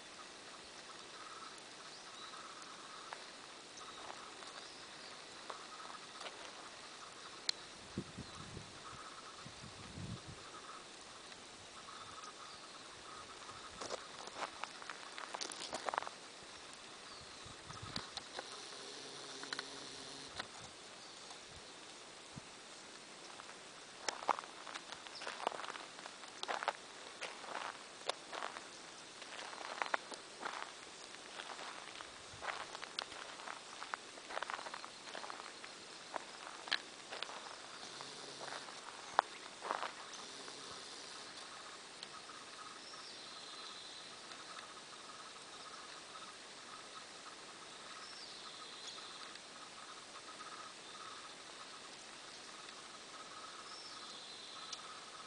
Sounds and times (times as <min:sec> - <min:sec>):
Animal: 0:00.0 - 0:16.2, 0:17.0 - 0:21.4, 0:29.2 - 0:55.2
Outside, rural or natural: 0:00.0 - 0:55.2.